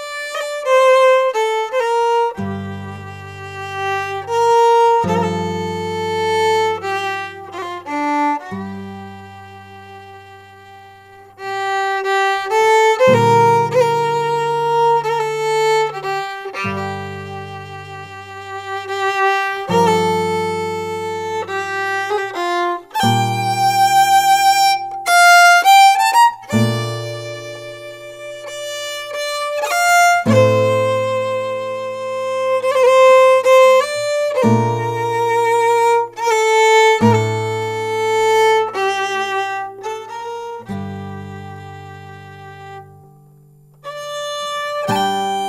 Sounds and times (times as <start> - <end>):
Music: 0.0 - 45.4.